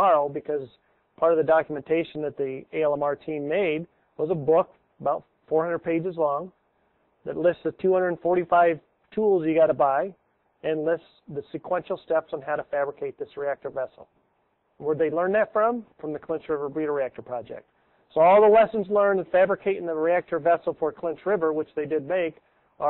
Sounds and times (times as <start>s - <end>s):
Speech: 0.0s - 6.6s, 7.2s - 14.1s, 14.8s - 22.9s.